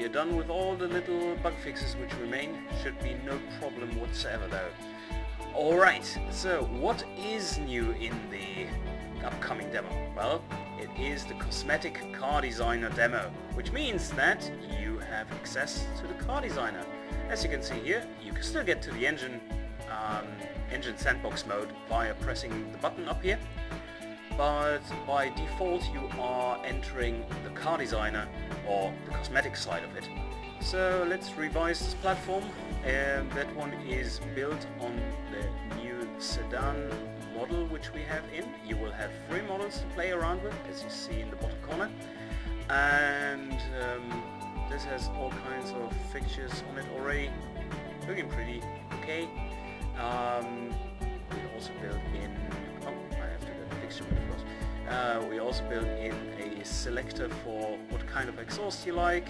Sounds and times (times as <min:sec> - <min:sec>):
Speech: 0:00.0 - 0:04.8, 0:05.5 - 0:23.4, 0:24.3 - 0:42.0, 0:42.7 - 0:47.4, 0:48.0 - 0:59.2
Music: 0:00.0 - 0:59.2.